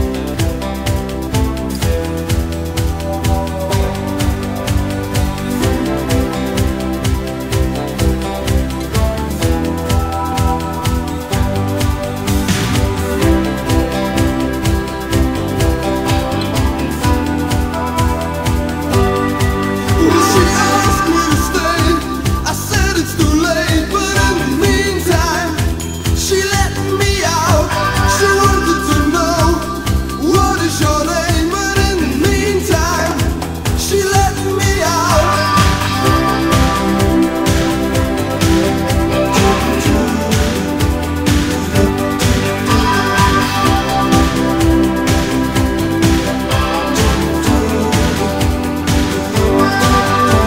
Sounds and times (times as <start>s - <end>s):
Music: 0.0s - 50.4s.